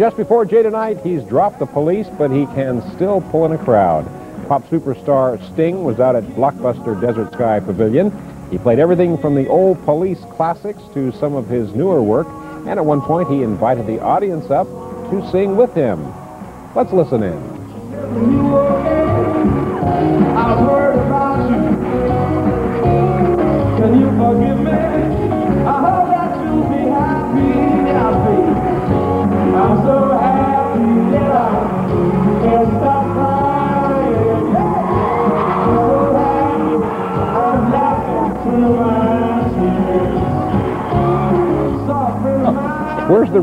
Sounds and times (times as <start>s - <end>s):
Music: 0.0s - 43.4s.